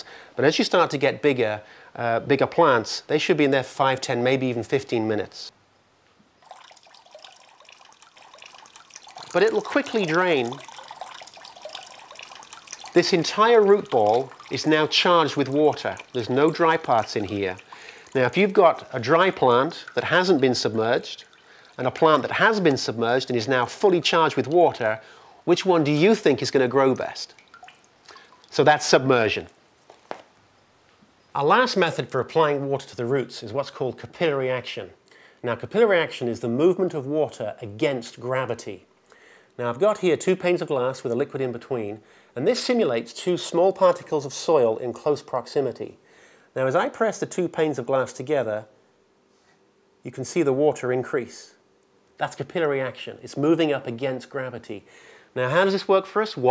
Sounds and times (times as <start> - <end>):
Speech: 0.0 - 5.5, 9.3 - 10.6, 12.9 - 17.6, 18.2 - 27.4, 28.5 - 29.5, 31.4 - 38.9, 39.6 - 46.0, 46.6 - 48.7, 50.0 - 51.6, 52.2 - 56.5
Drip: 6.4 - 23.0, 26.9 - 28.6.